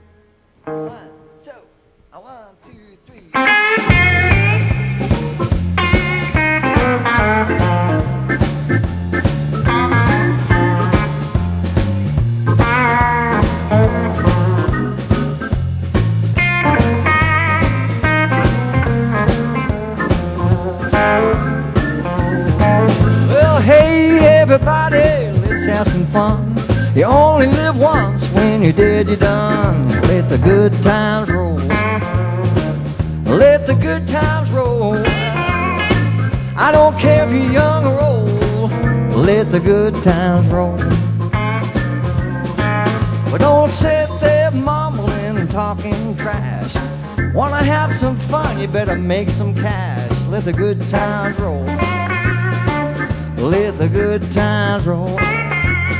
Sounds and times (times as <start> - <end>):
Electric guitar: 0.0 - 1.7, 3.2 - 56.0.